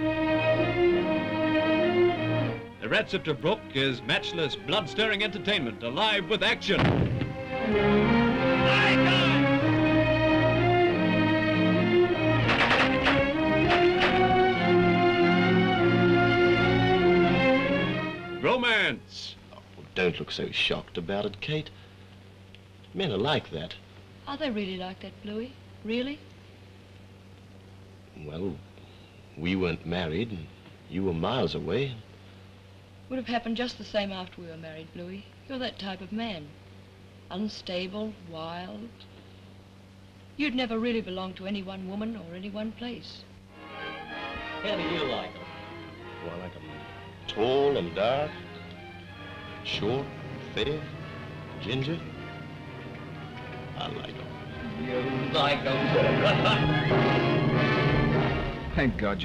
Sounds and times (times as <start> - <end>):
Music: 0.0 - 21.3, 40.4 - 59.2.